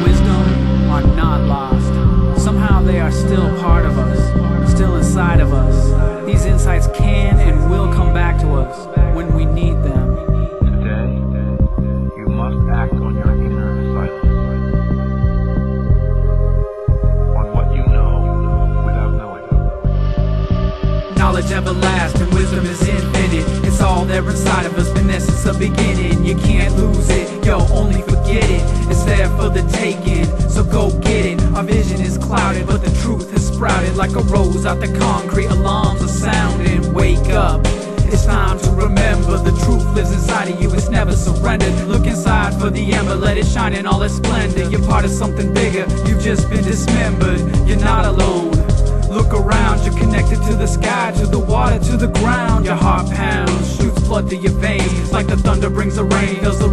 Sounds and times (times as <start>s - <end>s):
Speech: 0.0s - 14.2s, 17.3s - 19.6s, 49.1s - 56.7s
Music: 0.0s - 56.7s.